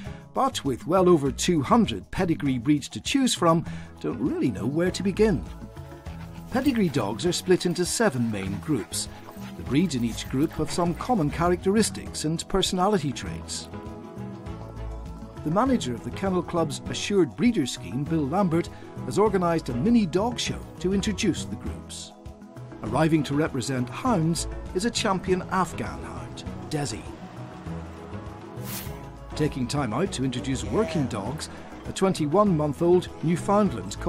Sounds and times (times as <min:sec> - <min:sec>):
Music: 0:00.0 - 0:34.0
Speech: 0:00.4 - 0:05.5, 0:06.5 - 0:13.7, 0:15.4 - 0:22.1, 0:22.8 - 0:27.2, 0:29.3 - 0:34.0.